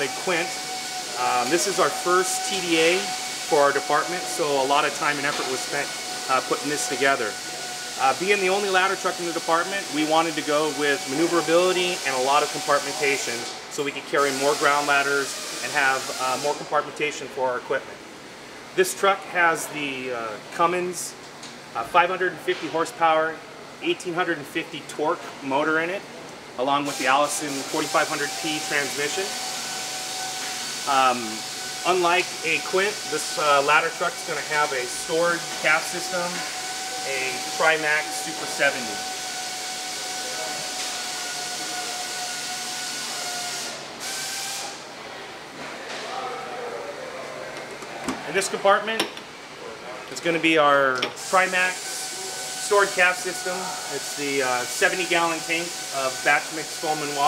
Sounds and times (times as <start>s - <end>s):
Speech: 1.2s - 7.4s, 8.0s - 18.0s, 18.8s - 21.2s, 21.8s - 29.3s, 30.9s - 36.4s, 37.0s - 39.0s, 48.2s - 52.0s, 52.6s - 57.2s.